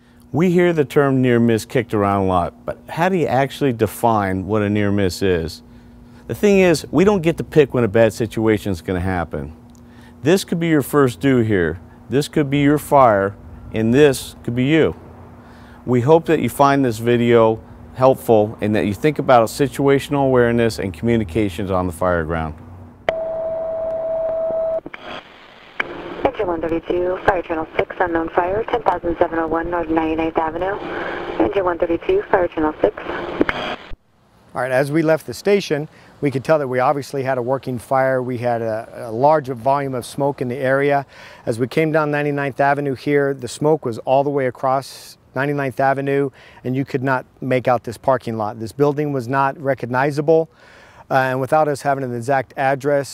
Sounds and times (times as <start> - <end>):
Speech: 0.3 - 5.6, 6.3 - 9.6, 10.2 - 15.0, 15.9 - 22.6, 26.3 - 33.0, 34.6 - 50.5, 51.1 - 53.1.